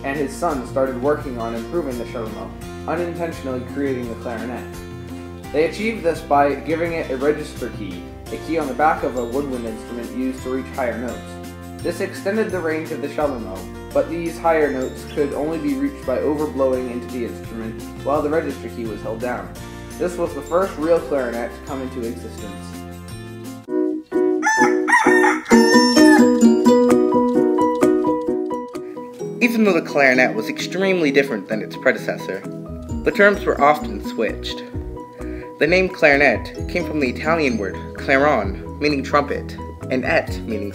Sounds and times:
Musical instrument: 23.6 - 29.2.

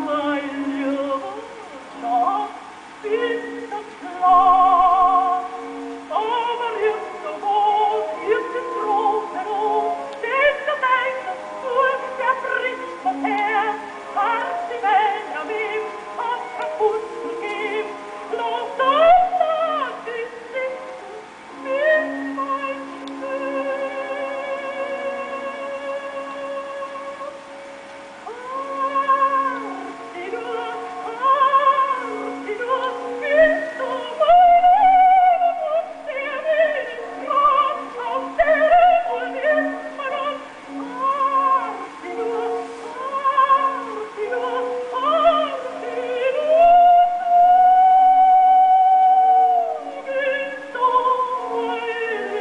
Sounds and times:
Music: 0.0 - 52.4
Yodeling: 0.0 - 52.4.

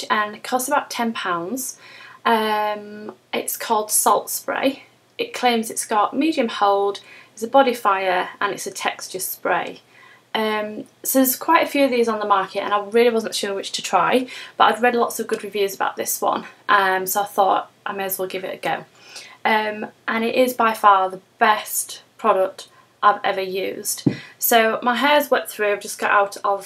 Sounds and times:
Speech: 0.0 - 9.8, 10.4 - 18.9, 19.5 - 26.6.

